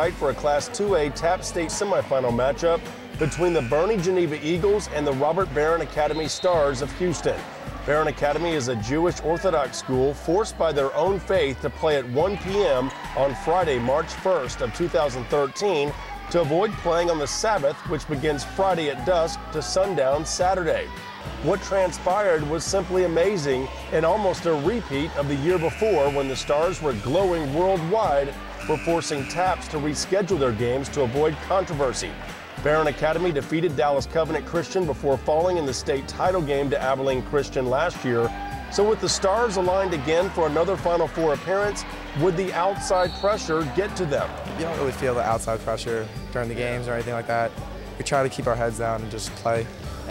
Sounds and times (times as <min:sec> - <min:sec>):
Music: 0:00.0 - 0:50.1
Speech: 0:00.0 - 0:50.1.